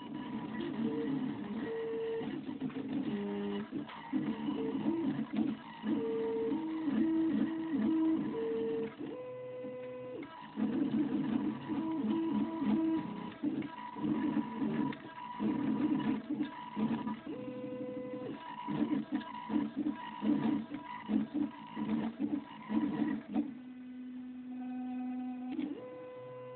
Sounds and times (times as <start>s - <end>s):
Printer: 0.0s - 26.5s.